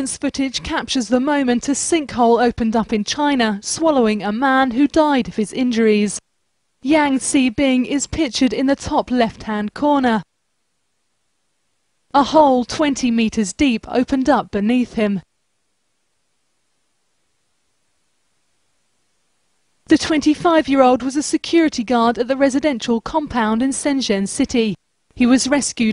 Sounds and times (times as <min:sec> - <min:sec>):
Speech: 0:00.0 - 0:06.2, 0:06.8 - 0:10.3, 0:12.1 - 0:15.3, 0:19.9 - 0:25.9.